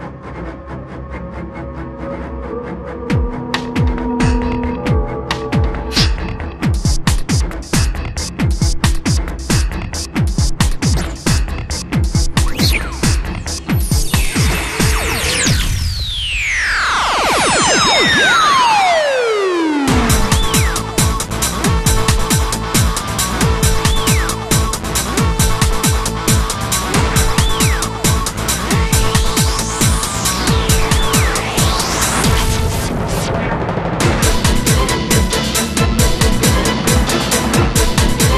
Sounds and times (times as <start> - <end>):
Music: 0.0 - 38.3.